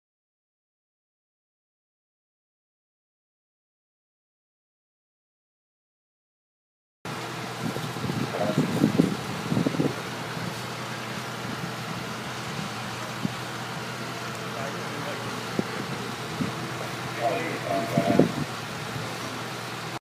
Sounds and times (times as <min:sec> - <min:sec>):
Vehicle: 0:07.1 - 0:20.0
Speech: 0:08.3 - 0:08.8, 0:14.5 - 0:15.4, 0:16.8 - 0:18.4.